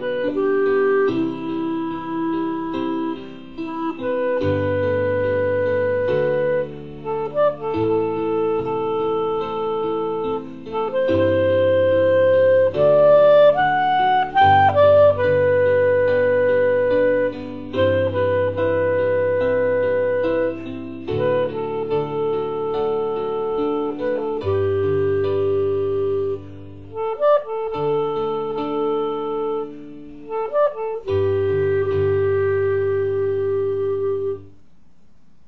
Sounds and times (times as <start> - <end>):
Clarinet: 0.0 - 34.6
Piano: 0.0 - 35.4.